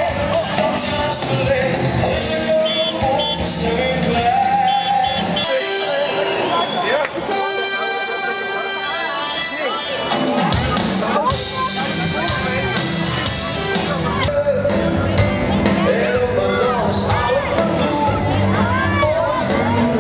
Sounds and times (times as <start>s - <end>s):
Music: 0.0s - 20.0s
Speech: 5.3s - 20.0s.